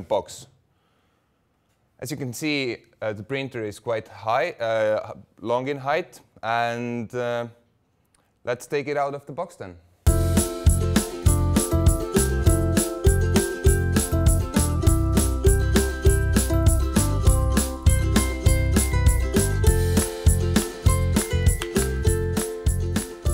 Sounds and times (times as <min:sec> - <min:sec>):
Speech: 0:00.0 - 0:00.6, 0:02.0 - 0:07.6, 0:08.4 - 0:09.8
Music: 0:10.1 - 0:23.3.